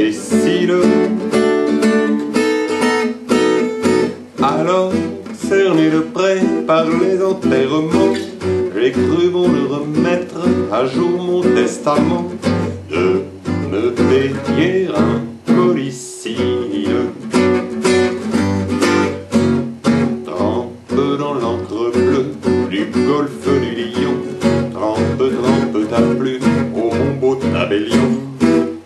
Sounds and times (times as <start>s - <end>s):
Music: 0.0s - 28.8s.